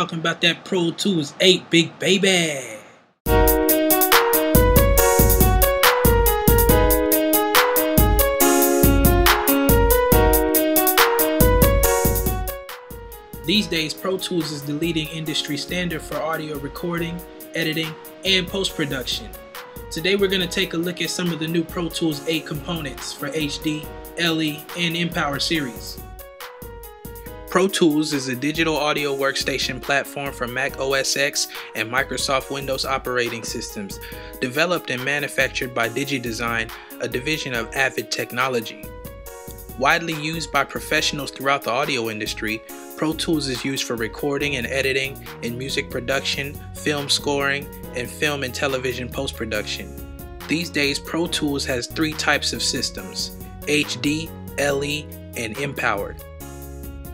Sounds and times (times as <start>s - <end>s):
Speech: 0.0s - 3.0s, 13.5s - 26.0s, 27.5s - 38.9s, 39.8s - 49.9s, 50.5s - 56.2s
Music: 3.2s - 57.1s.